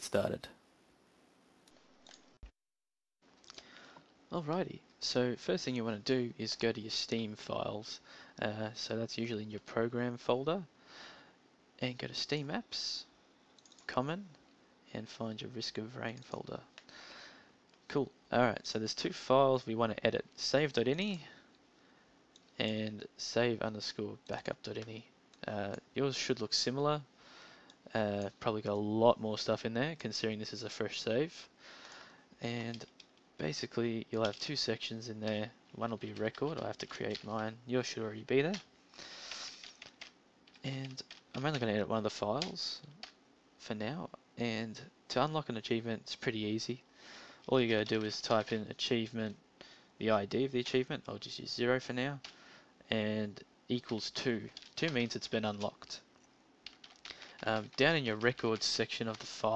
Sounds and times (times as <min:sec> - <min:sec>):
Speech: 0:00.0 - 0:00.6, 0:04.3 - 0:10.7, 0:11.8 - 0:13.1, 0:13.9 - 0:16.7, 0:17.9 - 0:21.4, 0:22.6 - 0:27.1, 0:27.9 - 0:31.5, 0:32.4 - 0:38.6, 0:40.6 - 0:43.0, 0:43.6 - 0:46.8, 0:47.5 - 0:49.4, 0:50.0 - 0:52.2, 0:52.9 - 0:56.1, 0:57.4 - 0:59.5.